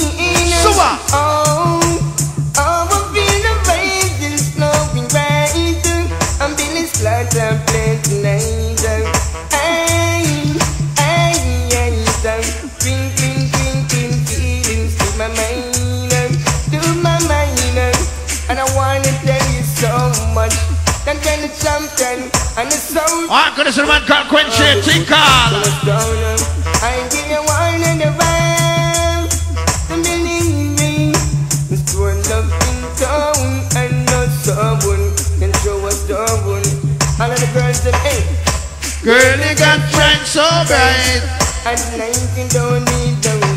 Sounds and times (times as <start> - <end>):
Music: 0.0 - 43.5.